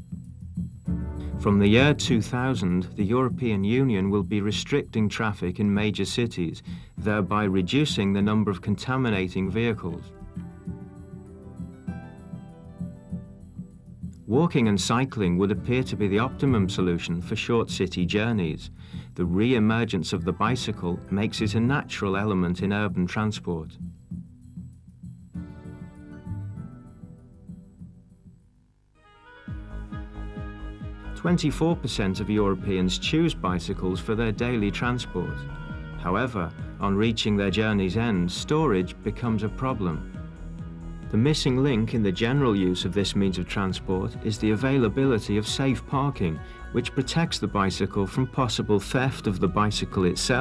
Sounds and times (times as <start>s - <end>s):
Music: 0.0s - 50.4s
Speech: 1.4s - 10.1s, 14.3s - 23.8s, 31.2s - 35.4s, 36.0s - 40.0s, 41.1s - 50.4s.